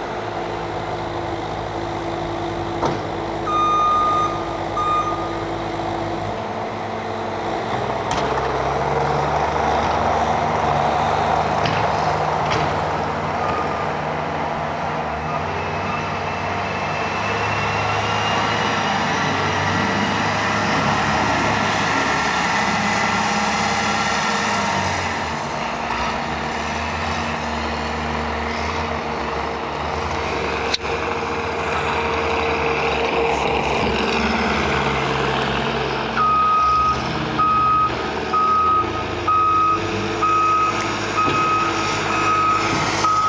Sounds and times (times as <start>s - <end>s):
Outside, rural or natural: 0.0s - 43.2s
Vehicle: 0.0s - 43.2s.